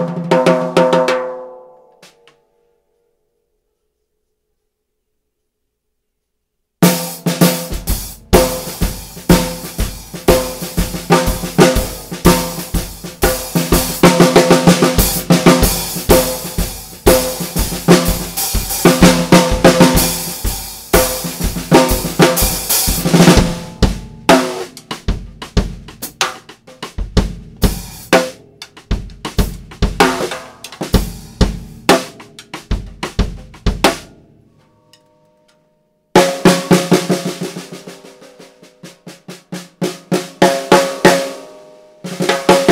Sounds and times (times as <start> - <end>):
Snare drum: 0.0 - 1.4, 6.8 - 34.1, 36.2 - 41.5, 42.1 - 42.7
Drum kit: 0.0 - 2.3, 6.8 - 34.3, 36.2 - 42.7
Cymbal: 6.8 - 26.4.